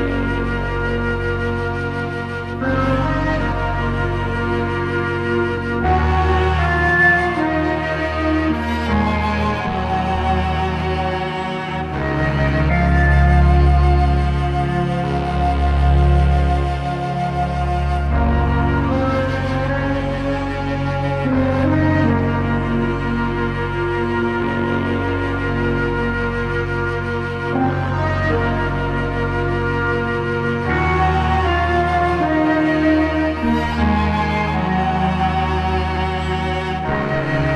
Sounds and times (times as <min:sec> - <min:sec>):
Cello: 0:00.0 - 0:37.5
Violin, fiddle: 0:00.0 - 0:37.5.